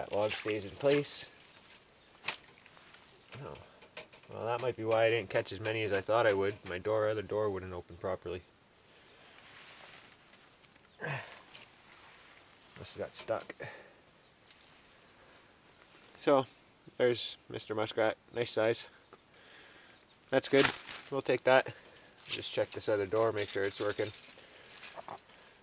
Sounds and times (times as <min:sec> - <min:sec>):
Speech: 0:00.0 - 0:01.3, 0:03.4 - 0:03.6, 0:04.3 - 0:08.5, 0:12.8 - 0:13.7, 0:16.2 - 0:18.9, 0:20.3 - 0:24.2
Outside, rural or natural: 0:00.0 - 0:25.6.